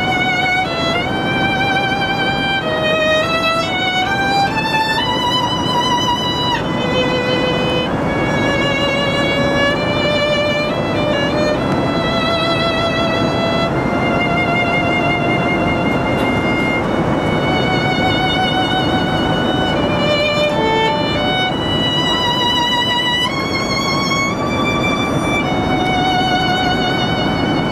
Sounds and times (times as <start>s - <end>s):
Violin, fiddle: 0.0s - 27.7s.